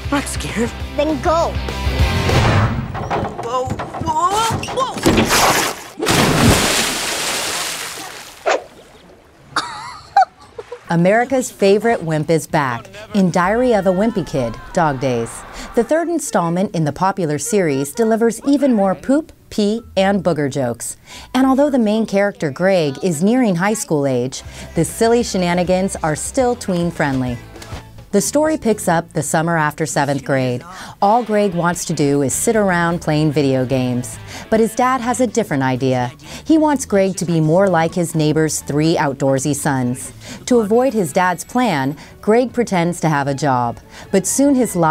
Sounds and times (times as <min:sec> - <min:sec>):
Music: 0:00.0 - 0:04.2, 0:11.3 - 0:44.9
Speech: 0:10.9 - 0:27.4, 0:28.2 - 0:44.9.